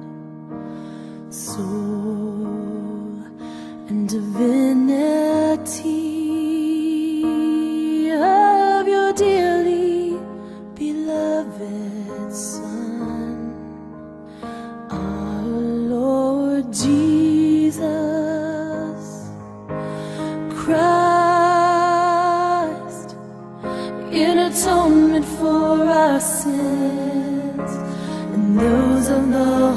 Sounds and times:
Music: 0.0 - 29.7.

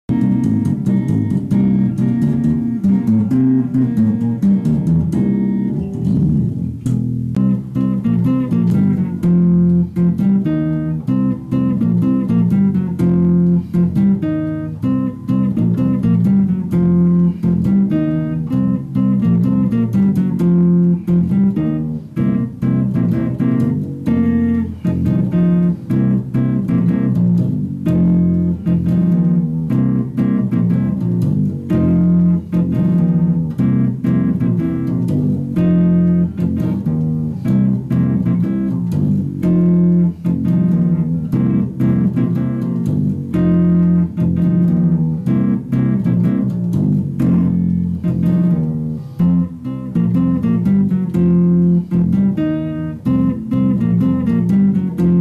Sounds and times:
Electric guitar: 0.0 - 55.2
Tapping (guitar technique): 0.1 - 55.2.

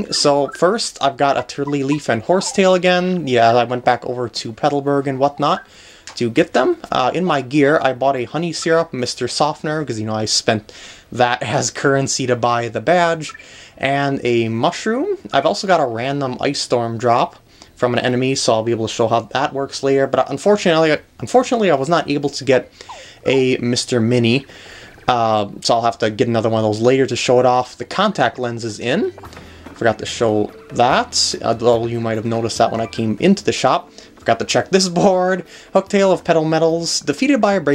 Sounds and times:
Speech: 0.0 - 29.2, 29.8 - 37.7.

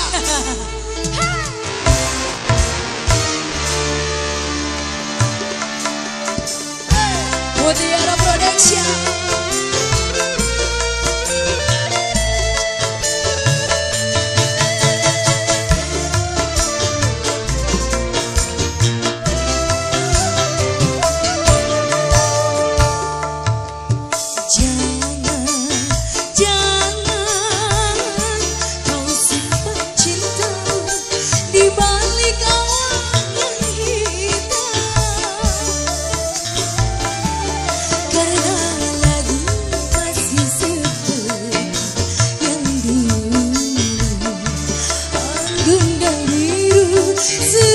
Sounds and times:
Soundtrack music: 0.0 - 47.7.

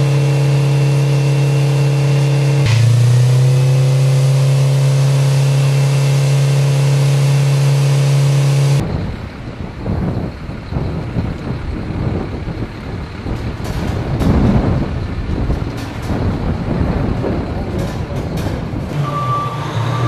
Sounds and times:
Vehicle: 0.0 - 20.0
Wind noise (microphone): 8.8 - 19.0.

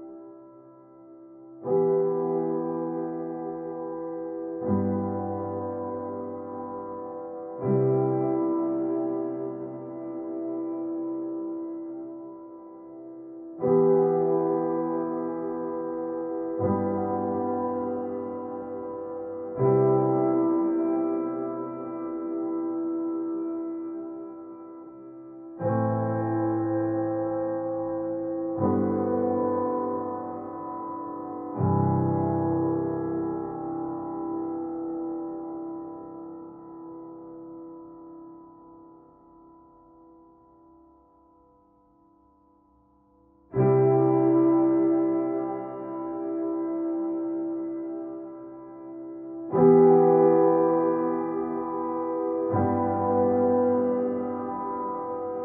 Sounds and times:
Music: 0.0 - 55.4.

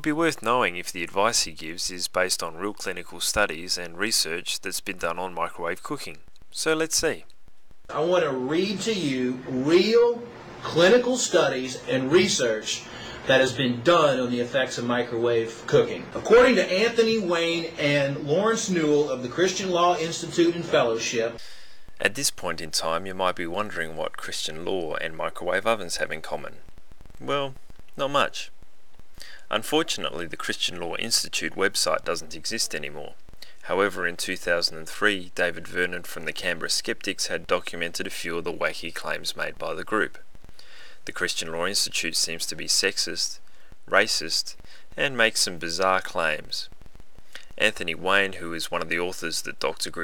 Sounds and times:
Speech: 0.0 - 7.3, 7.9 - 21.4, 22.0 - 26.6, 27.2 - 28.5, 29.2 - 40.2, 41.0 - 46.7, 47.4 - 50.0.

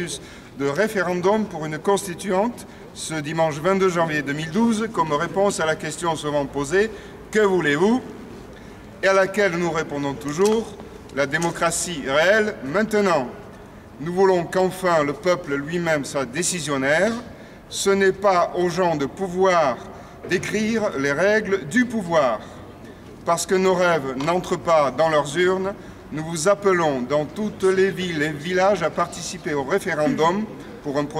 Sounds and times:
Speech: 0.0 - 8.1, 9.0 - 13.4, 14.0 - 22.6, 23.2 - 31.1.

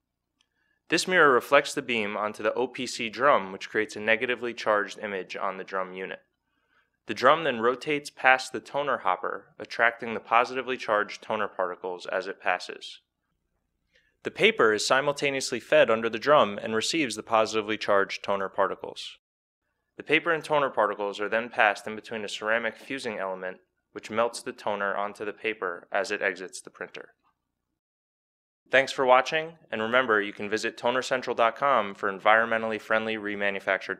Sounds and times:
Speech: 0.9 - 6.3, 7.1 - 13.1, 14.3 - 19.2, 20.0 - 27.2, 28.7 - 33.9.

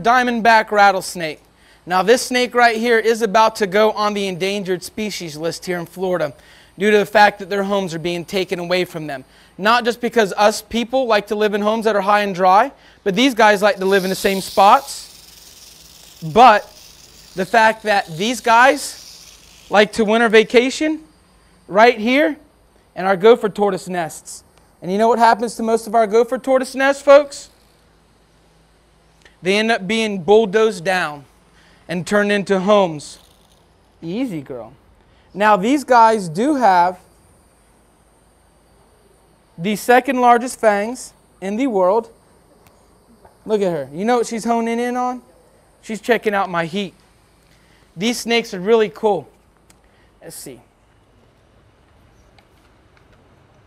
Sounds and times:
Speech: 0.0 - 15.1, 16.2 - 16.7, 17.4 - 19.0, 19.7 - 21.1, 21.7 - 22.4, 23.0 - 27.5, 29.4 - 31.3, 31.9 - 33.2, 34.0 - 34.8, 35.4 - 37.0, 39.6 - 42.2, 43.4 - 47.0, 48.0 - 49.3, 50.2 - 50.7.

